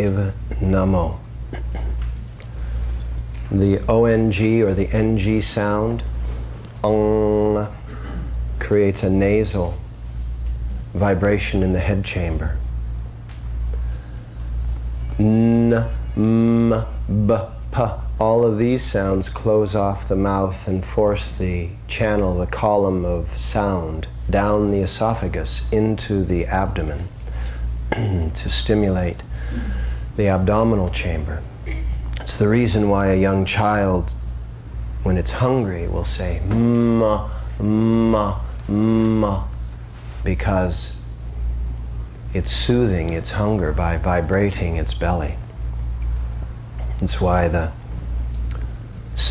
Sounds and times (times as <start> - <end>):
Speech: 0.0 - 1.2, 3.5 - 6.1, 6.8 - 7.8, 8.6 - 9.8, 11.0 - 12.6, 15.2 - 27.1, 28.0 - 29.2, 30.2 - 34.2, 35.0 - 39.6, 40.2 - 41.0, 42.3 - 45.5, 47.0 - 47.8
Mantra: 15.2 - 19.0, 35.2 - 39.6.